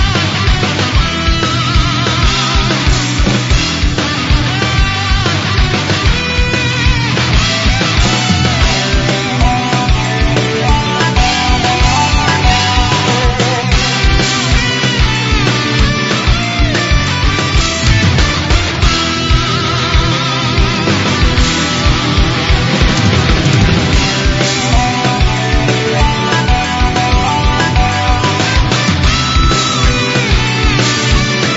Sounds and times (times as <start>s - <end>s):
Pop music: 7.8s - 17.2s, 17.8s - 31.5s.